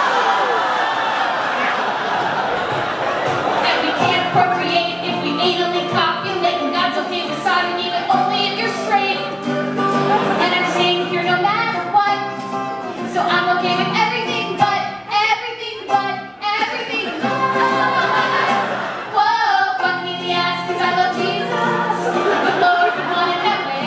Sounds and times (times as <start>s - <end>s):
Music: 2.8s - 23.8s
Singing: 13.1s - 23.8s.